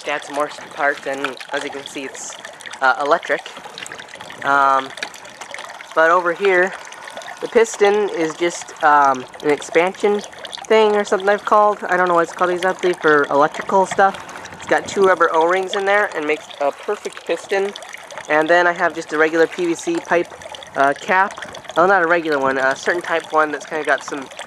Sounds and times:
Water: 0.0s - 24.4s.

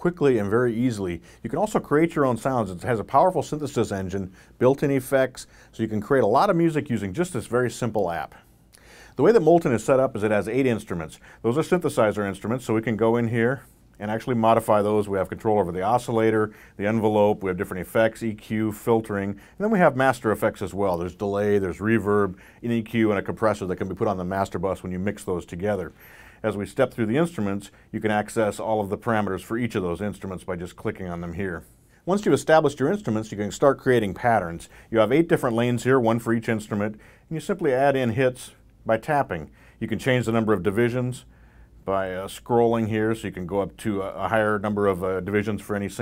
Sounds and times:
Speech: 0.0s - 8.4s, 9.2s - 46.0s.

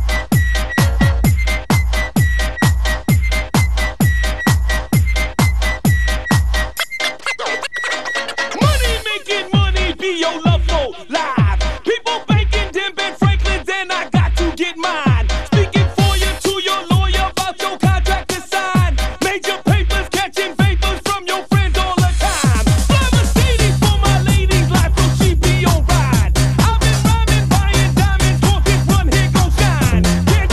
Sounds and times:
Music: 0.0s - 30.5s.

